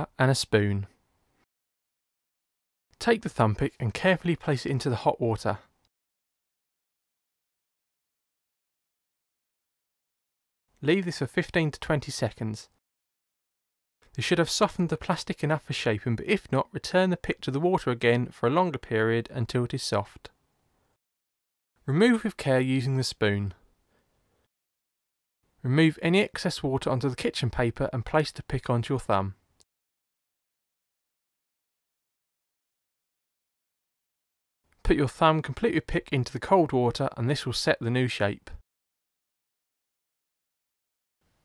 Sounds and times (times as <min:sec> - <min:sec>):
Speech: 0:00.0 - 0:01.0, 0:03.0 - 0:05.7, 0:10.8 - 0:12.8, 0:14.1 - 0:20.3, 0:21.8 - 0:23.6, 0:25.6 - 0:29.4, 0:34.8 - 0:38.6.